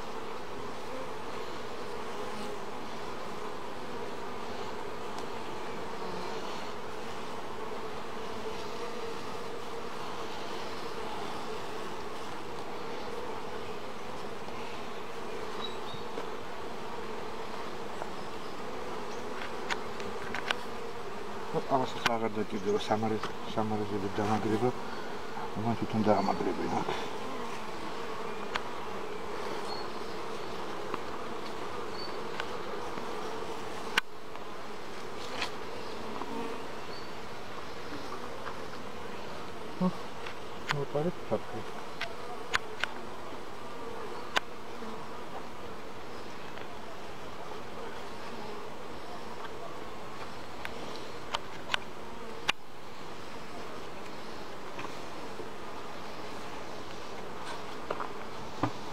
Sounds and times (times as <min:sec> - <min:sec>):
Bee, wasp, etc.: 0:00.0 - 0:58.9
Speech: 0:21.5 - 0:24.8, 0:25.4 - 0:27.1, 0:40.7 - 0:41.8.